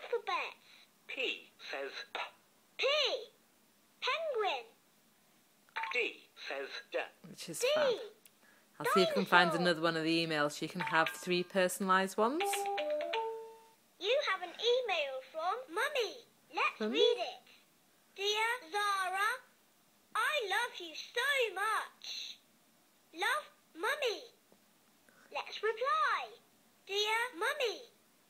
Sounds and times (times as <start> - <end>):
Inside, small room: 0.0 - 28.2
Speech: 8.8 - 12.6
Music: 12.4 - 13.8.